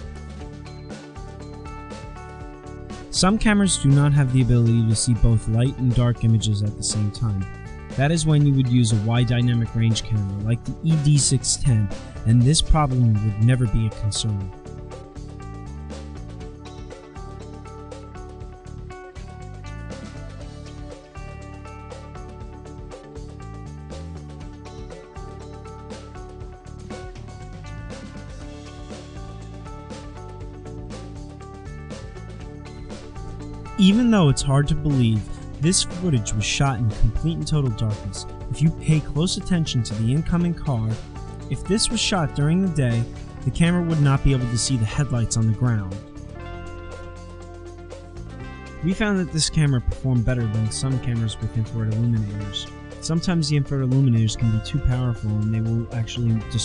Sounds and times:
Music: 0:00.0 - 0:56.6
Speech: 0:03.1 - 0:14.5, 0:33.8 - 0:46.0, 0:48.8 - 0:56.6.

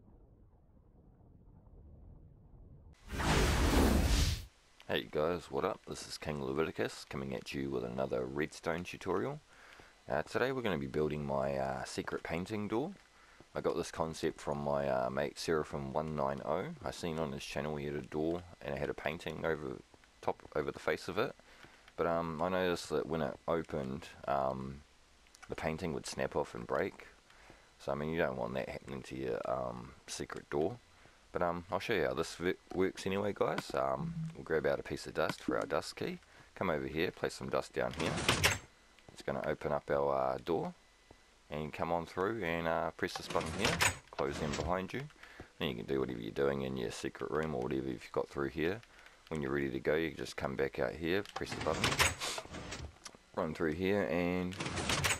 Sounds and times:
Speech: 0:04.9 - 0:09.4, 0:10.1 - 0:13.0, 0:13.6 - 0:21.4, 0:22.0 - 0:24.8, 0:25.4 - 0:27.2, 0:27.8 - 0:38.4, 0:39.2 - 0:40.8, 0:41.5 - 0:52.4, 0:53.4 - 0:54.7.

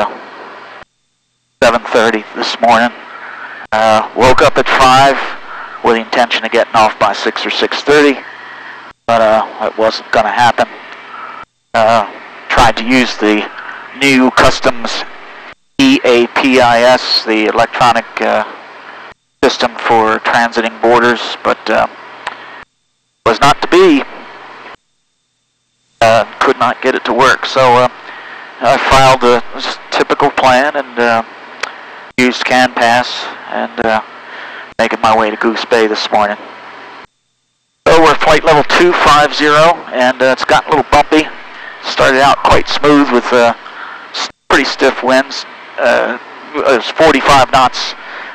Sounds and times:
Speech: 0:00.0 - 0:00.2, 0:01.6 - 0:03.0, 0:03.7 - 0:08.3, 0:09.1 - 0:10.8, 0:11.7 - 0:15.2, 0:15.8 - 0:18.6, 0:19.4 - 0:22.0, 0:23.3 - 0:24.2, 0:26.0 - 0:28.0, 0:28.6 - 0:31.3, 0:32.2 - 0:34.1, 0:34.8 - 0:36.4, 0:37.8 - 0:48.0.

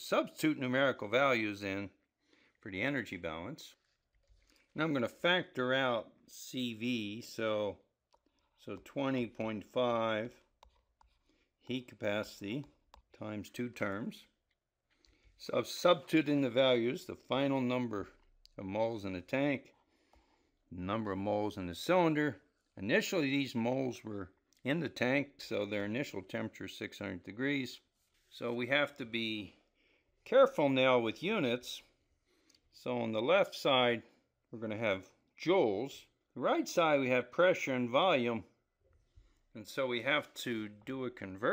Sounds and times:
Speech: 0:00.0 - 0:02.0, 0:02.6 - 0:03.8, 0:04.8 - 0:07.9, 0:08.6 - 0:10.4, 0:11.7 - 0:14.4, 0:15.4 - 0:19.8, 0:20.7 - 0:29.6, 0:30.2 - 0:32.0, 0:32.8 - 0:38.6, 0:39.6 - 0:41.5
Inside, small room: 0:00.0 - 0:41.5.

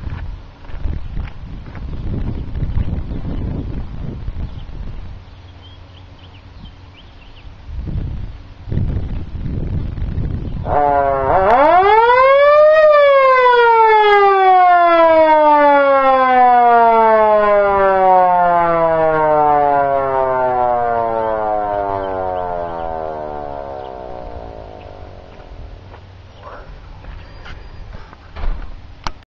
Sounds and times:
Siren: 0:10.6 - 0:25.8.

